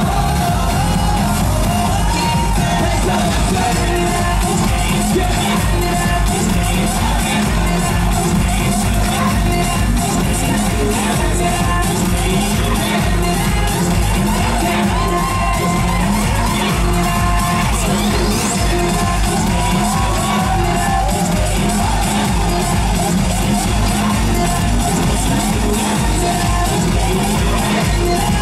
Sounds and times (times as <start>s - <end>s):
Music: 0.0s - 28.4s.